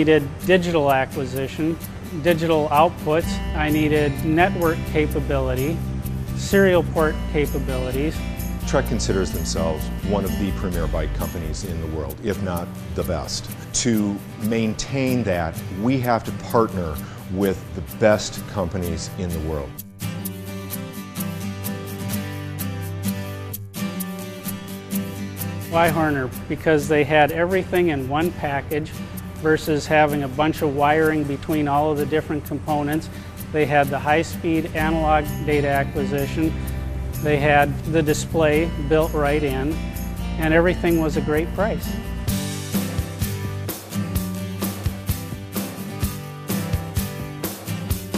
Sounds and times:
Speech: 0:00.0 - 0:05.8, 0:06.4 - 0:19.8, 0:25.7 - 0:36.6, 0:37.2 - 0:39.8, 0:40.4 - 0:41.8
Music: 0:00.0 - 0:48.1.

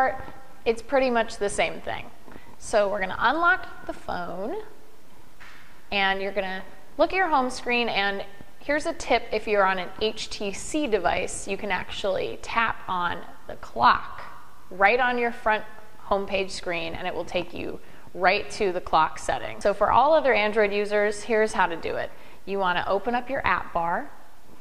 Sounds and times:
Speech: 0:00.0 - 0:04.7, 0:05.9 - 0:24.1.

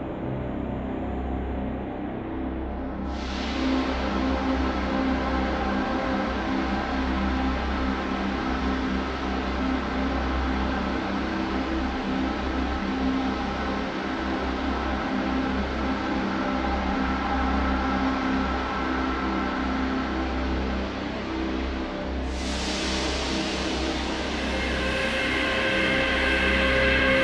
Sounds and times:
Music: 0:00.0 - 0:27.2.

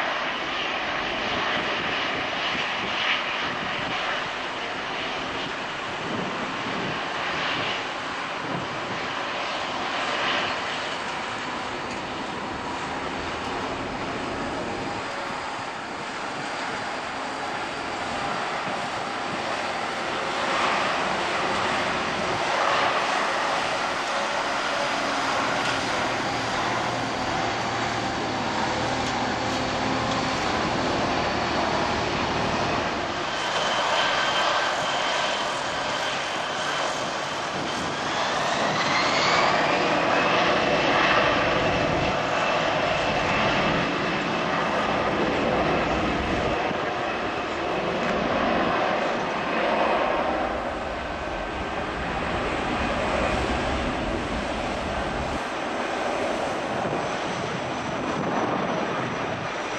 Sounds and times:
Aircraft: 0:00.0 - 0:59.7.

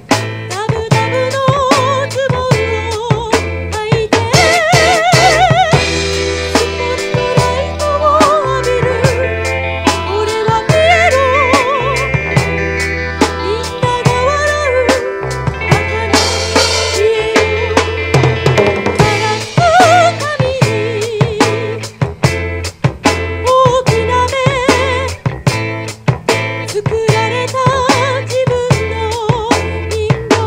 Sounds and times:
Progressive rock: 0:00.0 - 0:30.4
Rhythm and blues: 0:00.0 - 0:30.4.

